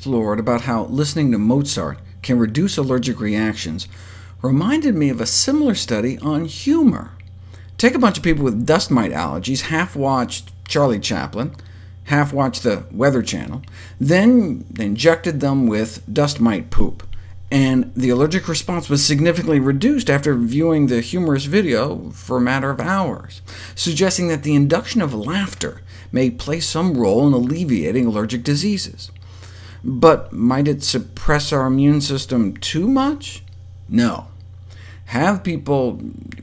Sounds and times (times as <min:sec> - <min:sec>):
Speech: 0:00.0 - 0:07.2, 0:07.8 - 0:29.2, 0:29.8 - 0:34.4, 0:35.1 - 0:36.4.